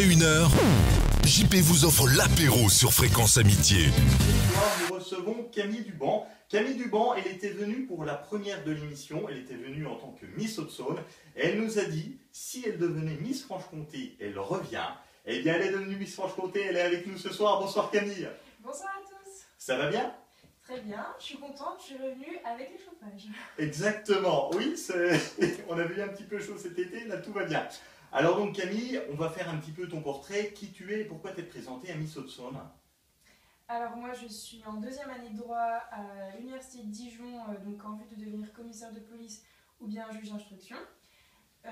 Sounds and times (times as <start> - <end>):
Speech: 0.0 - 0.6, 1.2 - 32.8, 33.7 - 41.0.